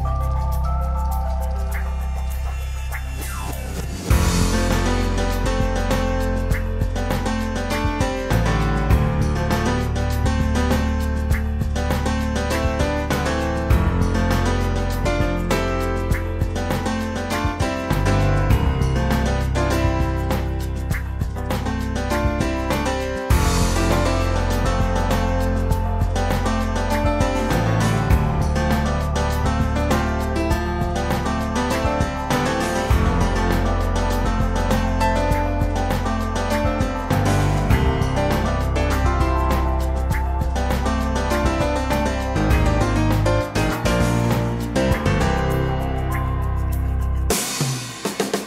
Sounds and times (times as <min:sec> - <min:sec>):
Music: 0:00.0 - 0:48.4.